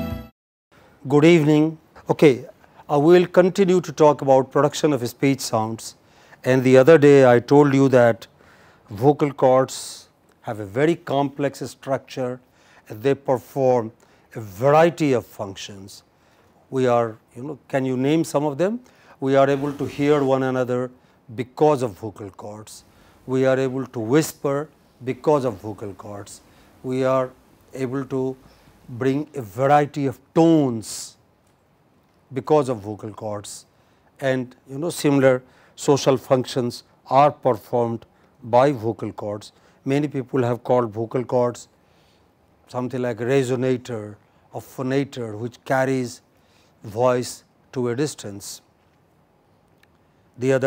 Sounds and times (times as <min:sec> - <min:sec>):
Speech: 0:01.0 - 0:08.3, 0:08.9 - 0:16.1, 0:16.7 - 0:31.2, 0:32.3 - 0:41.7, 0:42.7 - 0:48.7, 0:50.4 - 0:50.6.